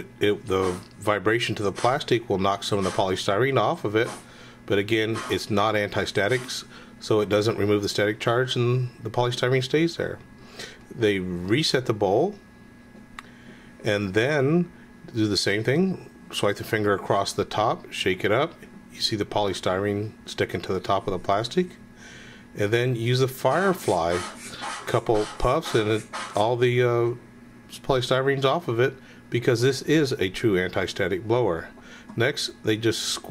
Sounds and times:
Speech: 0.0 - 10.2, 10.9 - 12.4, 13.8 - 21.8, 22.6 - 33.3.

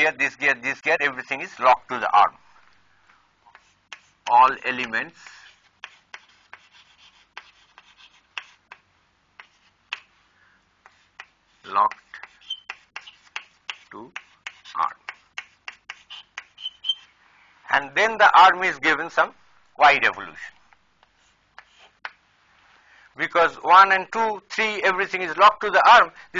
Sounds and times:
Speech: 0.0 - 2.4, 4.3 - 5.3, 11.7 - 12.0, 13.9 - 15.0, 17.7 - 20.6, 23.2 - 26.3.

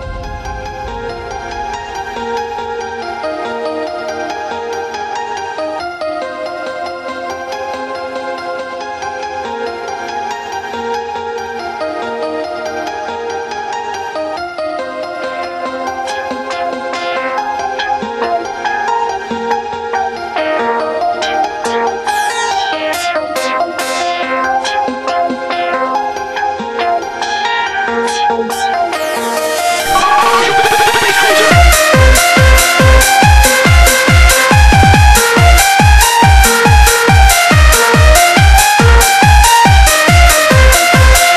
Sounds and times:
Techno: 29.4 - 41.3.

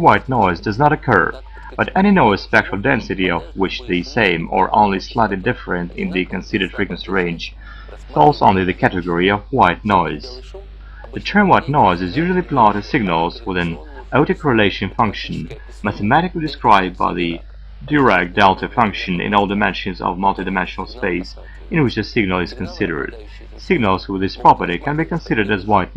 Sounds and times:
Speech: 0.0 - 25.9.

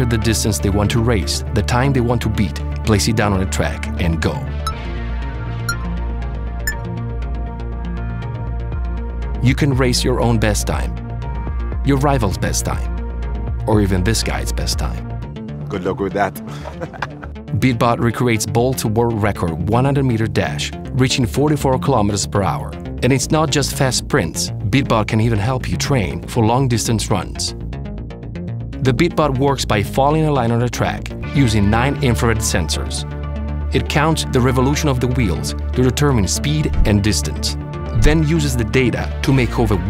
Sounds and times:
Speech: 0.0 - 4.6, 9.4 - 10.9, 11.9 - 12.9, 13.7 - 15.0, 15.7 - 16.7, 17.5 - 27.6, 28.8 - 33.0, 33.8 - 39.9
Music: 0.0 - 39.9.

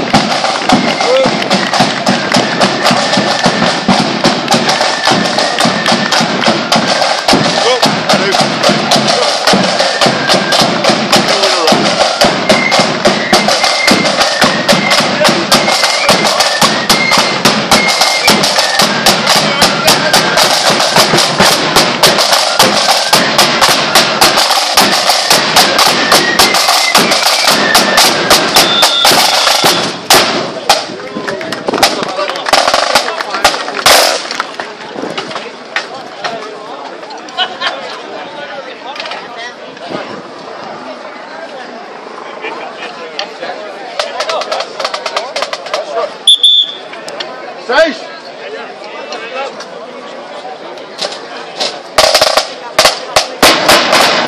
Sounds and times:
Music: 0.0 - 30.4
Speech: 0.9 - 1.5, 7.5 - 10.5, 11.1 - 12.1, 14.8 - 16.5, 19.2 - 20.9, 30.5 - 53.4.

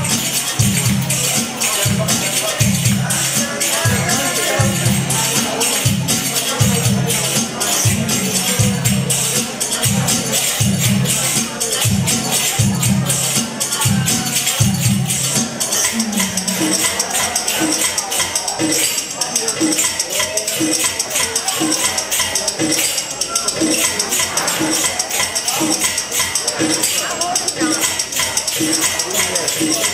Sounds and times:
Drum: 0.0 - 29.9.

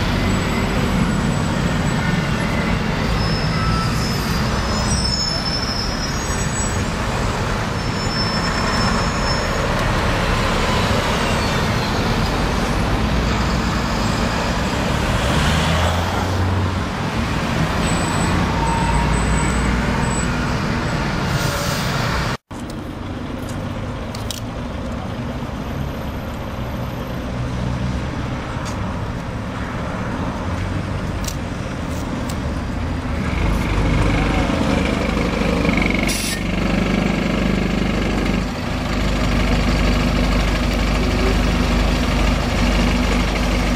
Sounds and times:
Bus: 0.0 - 43.7.

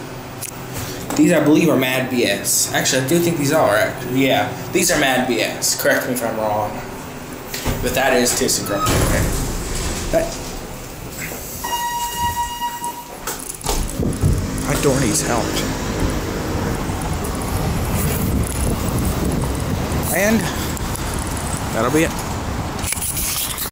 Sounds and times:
Traffic noise, roadway noise: 13.2 - 23.7.

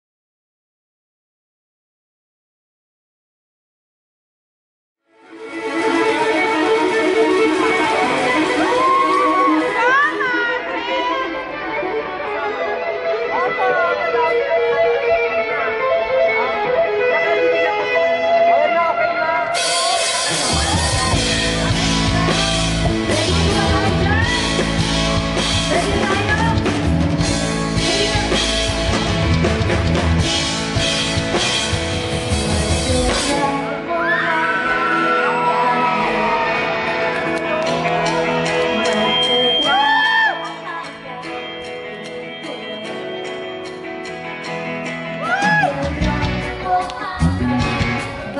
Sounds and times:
Music: 5.0 - 48.3.

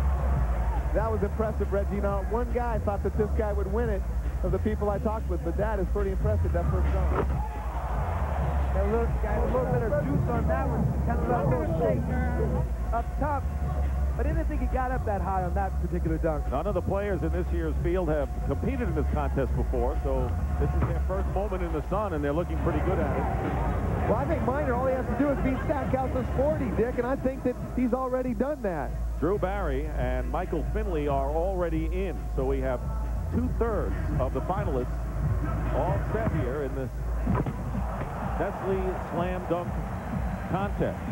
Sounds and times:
Music: 0.0 - 41.1
Speech: 14.2 - 23.2, 24.1 - 37.0, 38.4 - 39.8, 40.5 - 41.1.

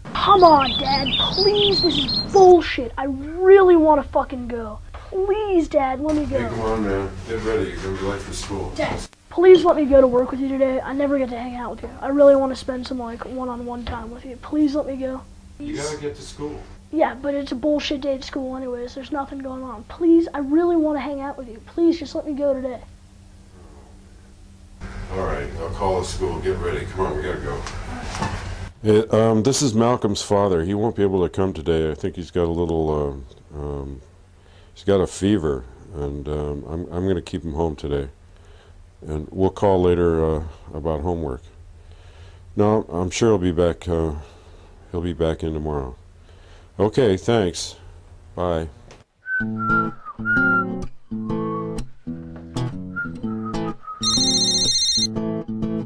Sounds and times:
Speech: 0.1 - 22.8, 25.1 - 28.1, 28.8 - 34.0, 34.8 - 38.2, 39.0 - 41.5, 42.6 - 44.3, 46.8 - 47.8.

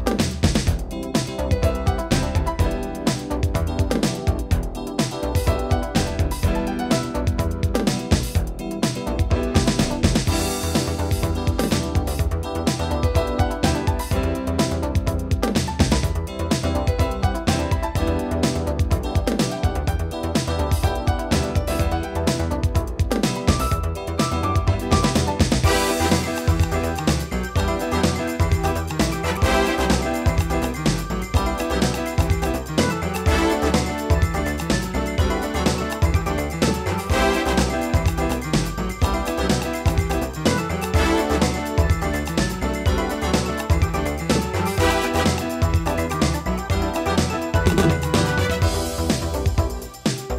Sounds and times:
Electronica: 0.0 - 50.3.

